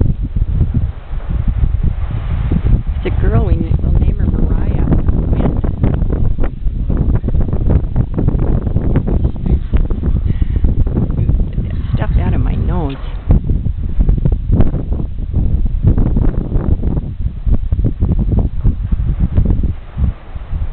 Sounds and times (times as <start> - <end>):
Outside, rural or natural: 0.0 - 20.7
Speech: 3.0 - 5.6, 11.6 - 13.2.